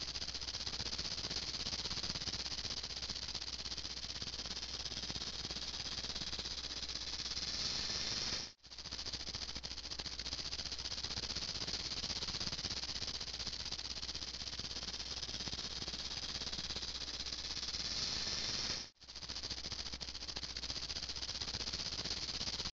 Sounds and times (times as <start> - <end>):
Snake: 0.0 - 22.7.